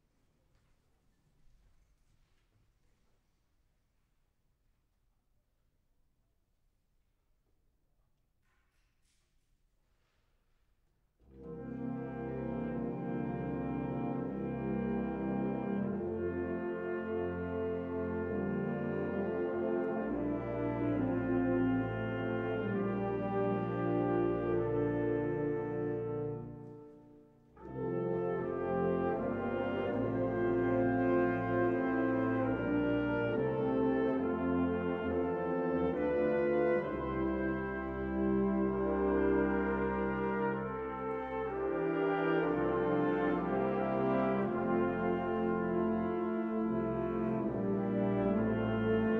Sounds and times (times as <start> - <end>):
Music: 0.0 - 49.1.